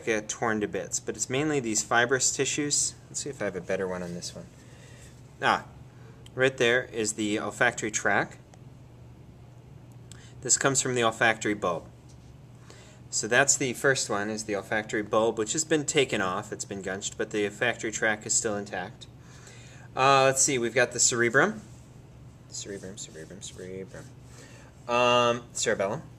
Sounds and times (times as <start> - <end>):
Speech: 0.0 - 4.5, 5.4 - 8.4, 10.4 - 11.9, 13.1 - 19.1, 20.0 - 21.7, 22.5 - 24.2, 24.9 - 26.1.